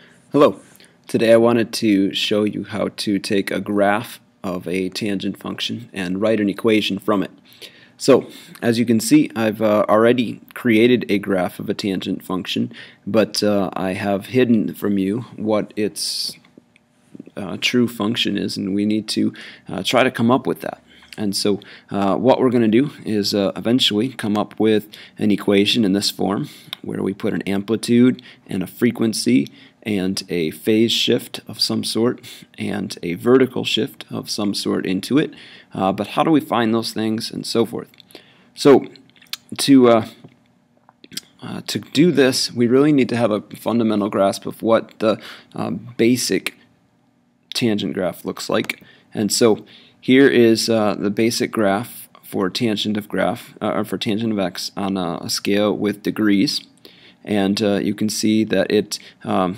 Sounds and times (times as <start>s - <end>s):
Speech: 0.3s - 7.4s, 8.0s - 16.5s, 17.2s - 38.0s, 38.6s - 40.3s, 41.1s - 46.6s, 47.5s - 59.5s.